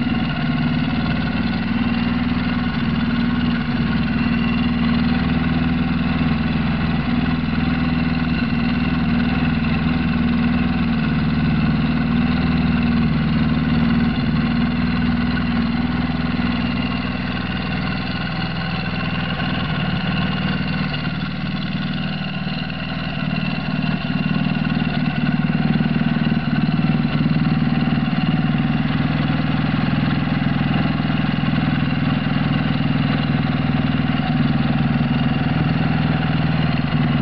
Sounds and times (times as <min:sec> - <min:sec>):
Idling: 0:00.0 - 0:37.2
Medium engine (mid frequency): 0:00.0 - 0:37.2
Vehicle: 0:00.0 - 0:37.2.